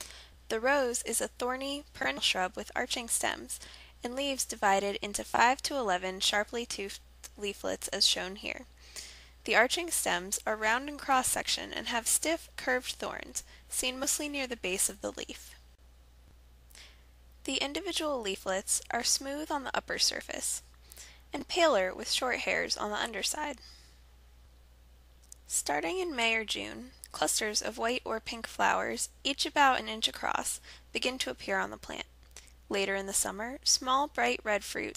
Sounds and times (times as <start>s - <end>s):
Speech: 0.5s - 8.7s, 9.4s - 15.6s, 17.4s - 20.6s, 21.3s - 23.6s, 25.5s - 32.1s, 32.7s - 34.9s.